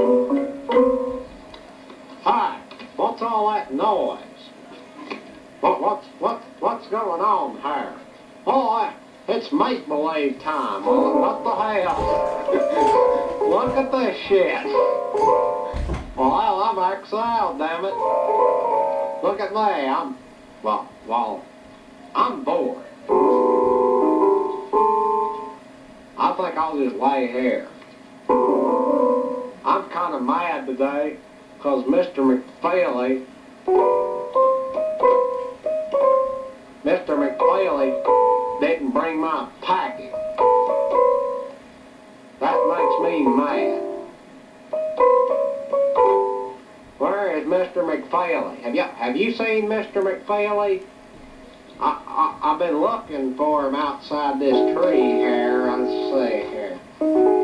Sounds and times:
Music: 0.0s - 1.4s, 10.9s - 14.1s, 14.7s - 15.9s, 17.9s - 19.3s, 23.1s - 25.6s, 28.3s - 29.7s, 33.7s - 36.6s, 37.2s - 38.7s, 39.9s - 41.6s, 42.4s - 46.7s, 54.5s - 57.4s
Speech: 2.2s - 14.9s, 16.2s - 18.0s, 19.2s - 21.5s, 22.1s - 23.1s, 26.2s - 27.8s, 29.7s - 33.3s, 36.8s - 40.2s, 42.4s - 43.8s, 47.0s - 50.9s, 51.8s - 56.8s.

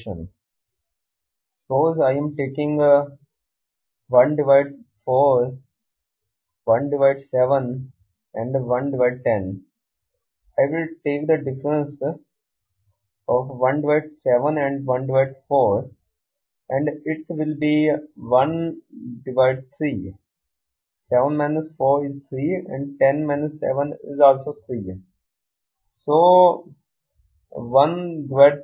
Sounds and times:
Speech: 0.0s - 0.3s, 1.7s - 3.2s, 4.1s - 5.6s, 6.7s - 9.6s, 10.6s - 12.2s, 13.3s - 15.9s, 16.7s - 20.2s, 21.0s - 25.0s, 26.0s - 26.8s, 27.6s - 28.6s.

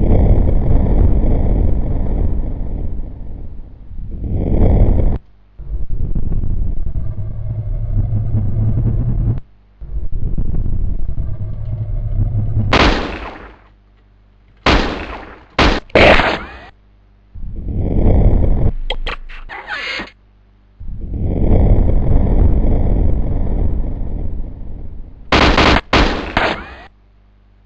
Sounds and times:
Gunshot, gunfire: 12.7s - 13.6s, 14.6s - 16.6s, 25.4s - 26.9s.

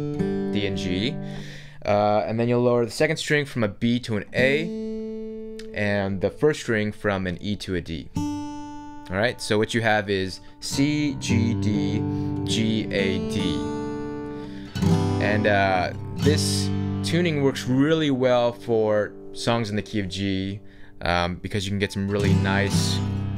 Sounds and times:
Acoustic guitar: 0.0s - 3.1s, 4.1s - 23.3s
Speech: 0.6s - 1.2s, 1.8s - 4.7s, 5.6s - 8.1s, 9.1s - 13.7s, 15.2s - 23.1s.

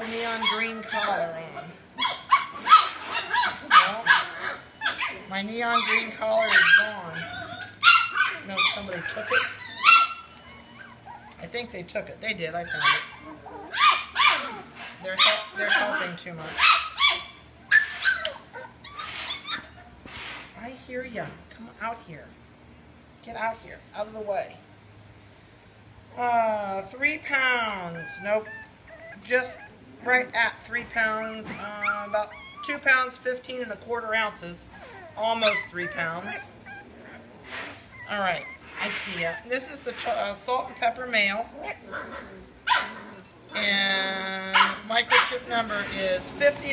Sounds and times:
Speech: 0.0s - 1.7s, 5.3s - 7.3s, 8.4s - 9.4s, 11.4s - 13.1s, 15.0s - 16.6s, 20.6s - 22.3s, 23.2s - 24.6s, 26.2s - 28.5s, 29.2s - 34.6s, 35.2s - 36.4s, 38.1s - 41.8s, 43.6s - 46.7s
Dog: 0.4s - 11.5s, 12.7s - 19.9s, 27.7s - 29.8s, 31.0s - 32.8s, 34.8s - 36.9s, 37.5s - 40.2s, 44.5s - 45.4s.

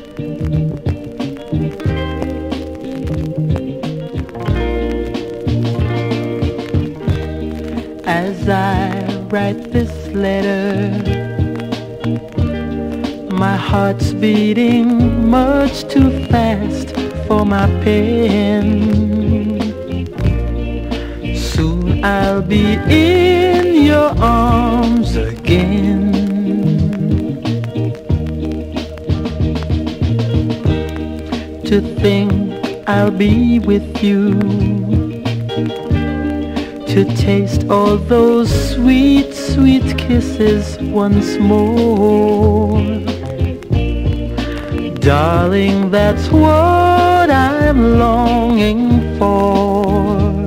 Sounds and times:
Music: 0.0s - 50.4s.

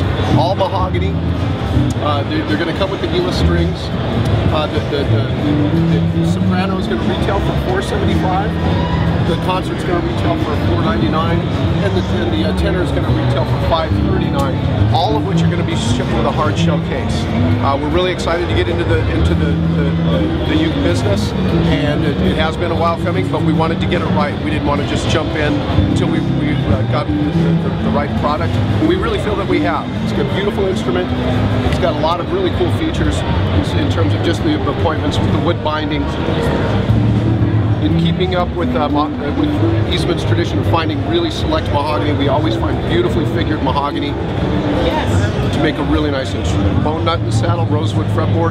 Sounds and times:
Speech: 0.0s - 1.2s, 1.9s - 36.6s, 37.7s - 44.2s, 44.8s - 48.5s
Acoustic guitar: 0.0s - 48.5s.

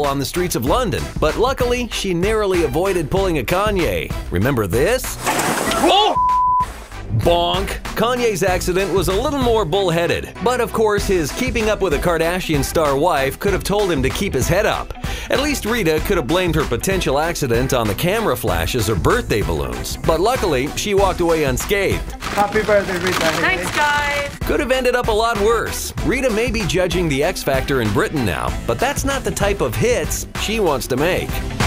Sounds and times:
Speech: 0.0s - 5.2s, 7.2s - 31.4s
Music: 0.0s - 31.6s.

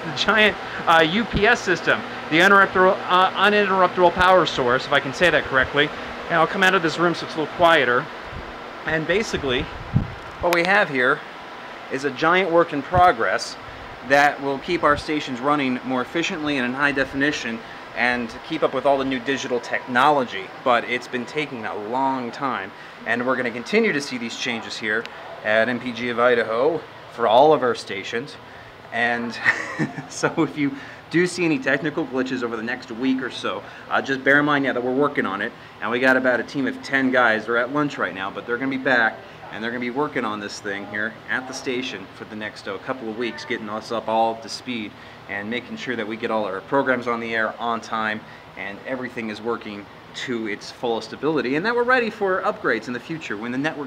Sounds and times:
Speech: 0.0s - 8.1s, 8.9s - 9.7s, 10.4s - 11.2s, 11.9s - 53.8s
Air conditioning: 0.0s - 53.8s.

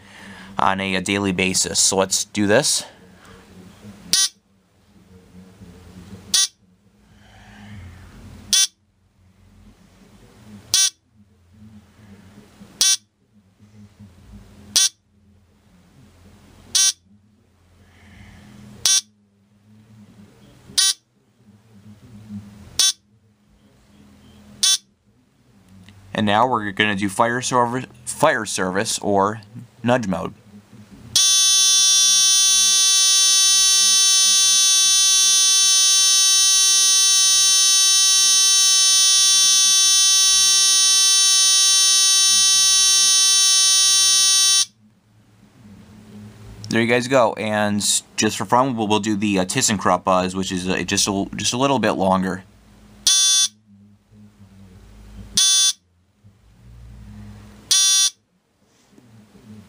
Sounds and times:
Speech: 0.2s - 4.1s, 4.8s - 8.0s, 9.5s - 18.3s, 19.5s - 24.6s, 25.2s - 31.2s, 45.3s - 52.5s, 58.9s - 59.6s.

